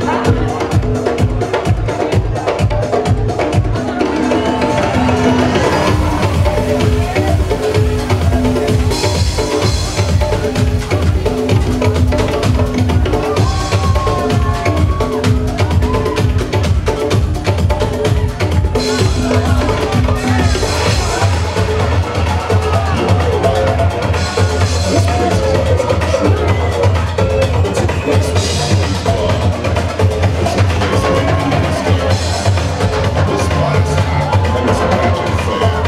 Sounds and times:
Electronica: 0.0 - 35.8.

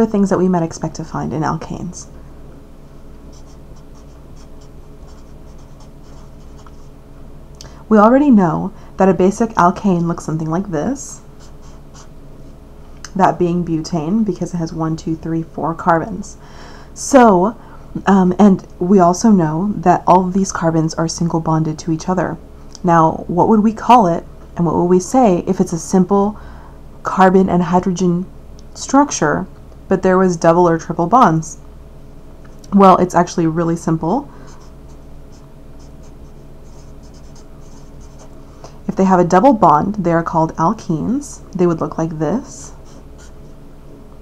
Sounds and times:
Speech: 0.0 - 2.1, 7.9 - 11.2, 13.1 - 16.4, 17.0 - 26.4, 27.1 - 31.6, 32.7 - 34.3, 38.9 - 42.8
Inside, small room: 0.0 - 44.2.

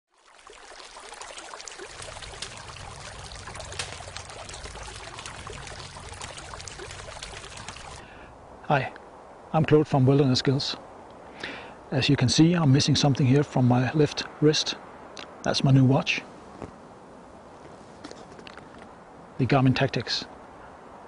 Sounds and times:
Trickle, dribble: 0.1 - 8.1.

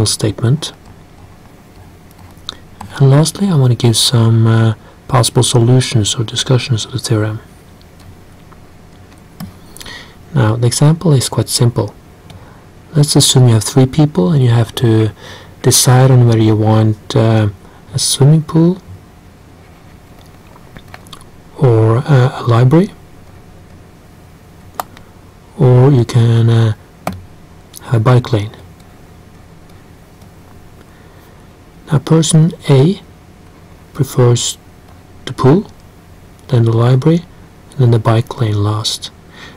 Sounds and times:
Speech: 0.0 - 0.8, 2.8 - 7.5, 10.3 - 12.0, 12.9 - 18.9, 21.5 - 23.0, 25.5 - 26.8, 27.8 - 28.7, 31.9 - 33.1, 33.9 - 34.6, 35.2 - 35.8, 36.4 - 39.2.

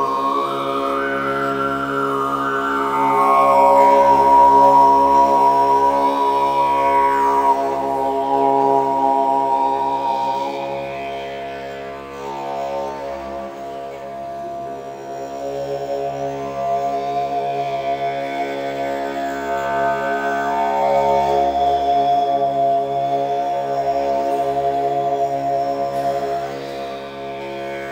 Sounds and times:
Didgeridoo: 0.0 - 27.9.

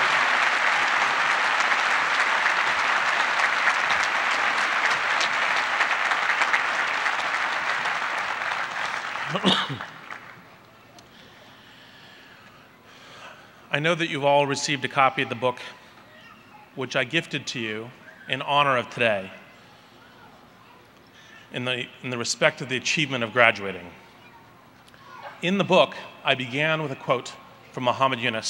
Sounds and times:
Male speech, man speaking: 13.7 - 15.8, 16.8 - 19.4, 21.5 - 24.0, 25.4 - 28.4
Narration, monologue: 13.7 - 16.0, 16.7 - 19.6, 21.2 - 24.2, 24.9 - 28.4.

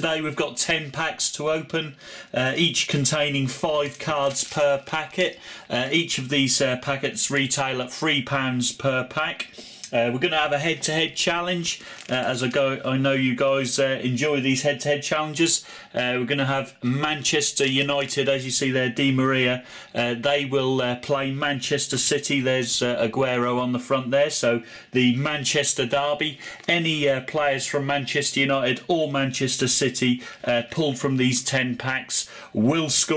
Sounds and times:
Speech: 0.0 - 33.1.

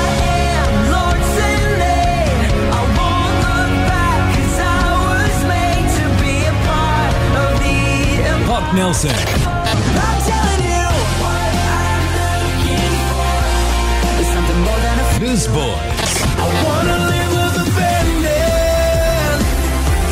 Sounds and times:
Music: 0.0 - 20.1
Speech: 8.4 - 9.4, 14.9 - 15.9.

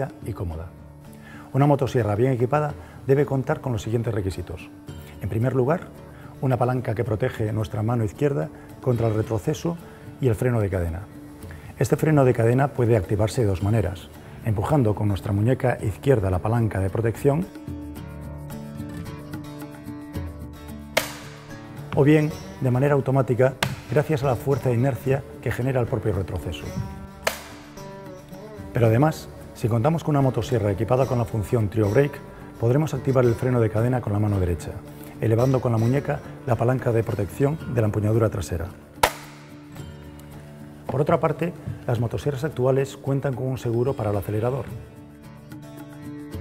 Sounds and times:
Speech: 0.0 - 0.8, 1.5 - 11.1, 11.8 - 17.5, 22.0 - 26.8, 28.8 - 38.8, 40.9 - 44.8
Music: 0.0 - 46.4.

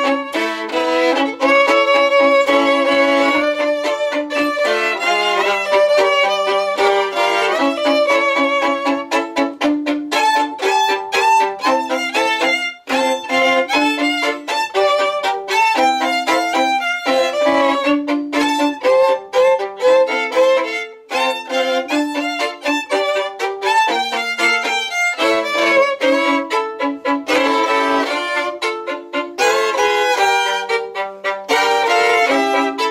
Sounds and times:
Violin, fiddle: 0.0 - 32.9.

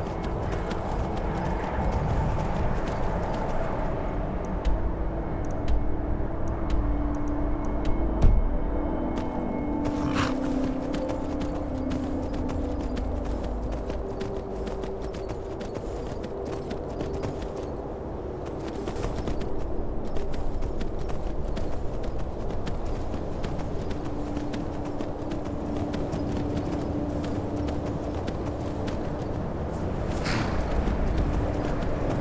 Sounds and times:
Clip-clop: 0.0 - 32.2
Music: 0.0 - 32.2.

